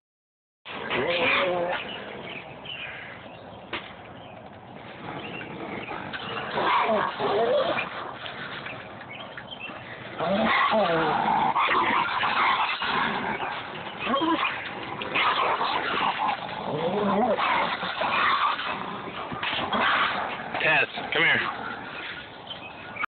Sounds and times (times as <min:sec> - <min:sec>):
Speech: 0:01.0 - 0:01.9, 0:20.6 - 0:21.5.